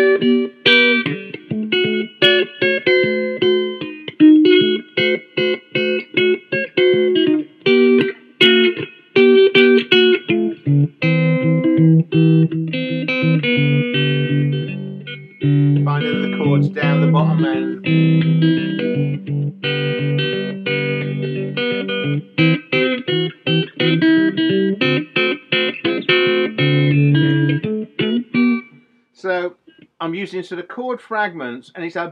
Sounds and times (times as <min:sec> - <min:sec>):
Guitar: 0:00.0 - 0:32.1
Inside, small room: 0:00.0 - 0:32.1
Speech: 0:15.8 - 0:17.8, 0:29.2 - 0:32.1.